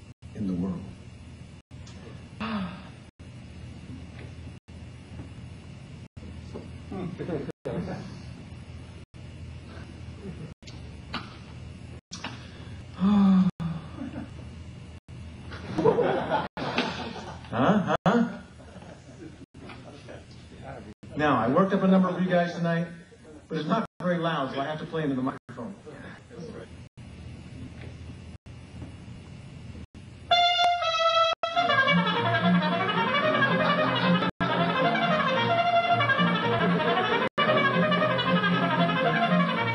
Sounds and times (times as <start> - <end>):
Speech: 0.4 - 1.0, 19.8 - 26.8
Trumpet: 30.3 - 39.7.